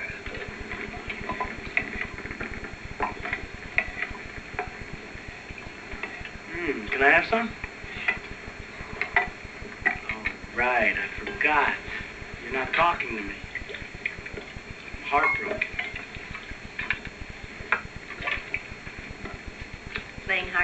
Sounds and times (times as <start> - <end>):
Speech: 6.5 - 7.6, 10.1 - 13.4, 15.1 - 15.6, 20.3 - 20.6.